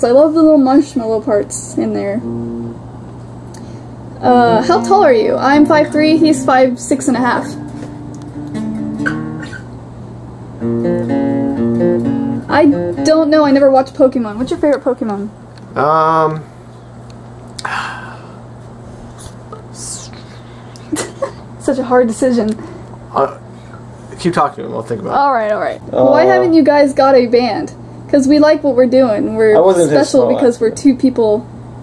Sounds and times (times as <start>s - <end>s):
Inside, small room: 0.0s - 31.8s.